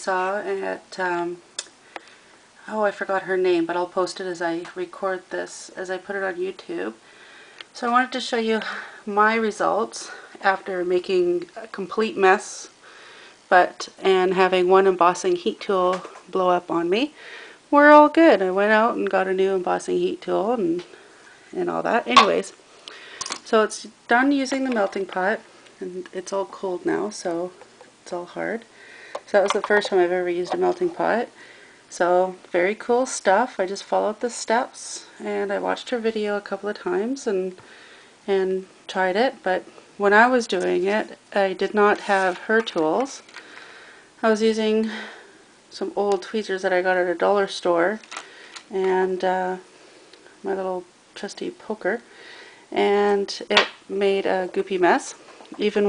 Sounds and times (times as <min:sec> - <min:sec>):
Speech: 0:00.0 - 0:01.4, 0:02.6 - 0:07.0, 0:07.8 - 0:12.8, 0:13.5 - 0:20.9, 0:21.5 - 0:22.6, 0:23.4 - 0:28.7, 0:29.3 - 0:37.6, 0:38.3 - 0:43.2, 0:44.2 - 0:48.1, 0:48.7 - 0:49.7, 0:50.4 - 0:52.0, 0:52.7 - 0:55.8.